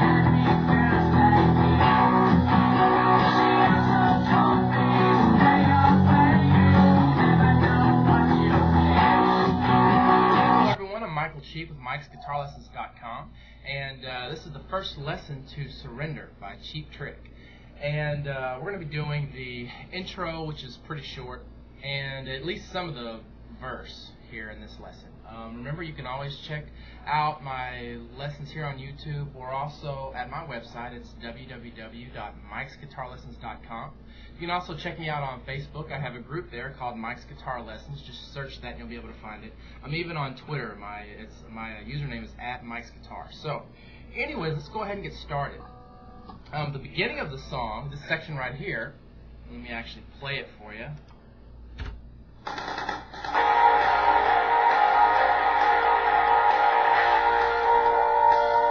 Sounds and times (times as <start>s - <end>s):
Speech: 10.8s - 45.7s, 46.5s - 51.1s.